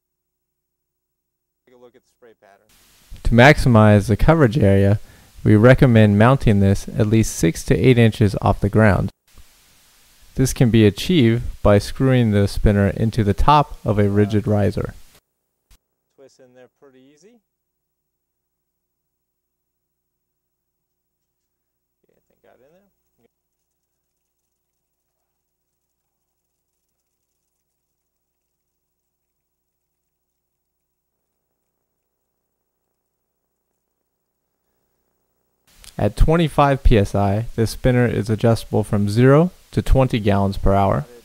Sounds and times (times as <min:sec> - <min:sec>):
Speech: 0:01.7 - 0:09.2, 0:10.4 - 0:15.0, 0:16.2 - 0:17.4, 0:22.0 - 0:22.9, 0:35.9 - 0:41.2.